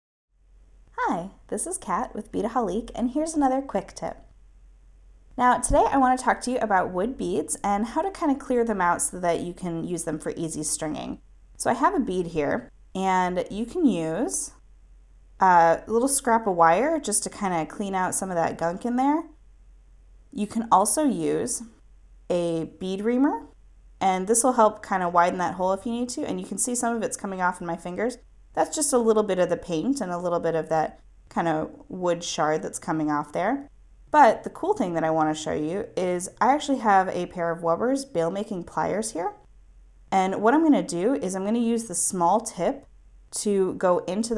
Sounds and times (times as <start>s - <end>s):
Speech: 1.0s - 4.2s, 5.4s - 14.5s, 15.4s - 19.3s, 20.4s - 21.7s, 22.3s - 39.4s, 40.1s - 42.8s, 43.4s - 44.3s.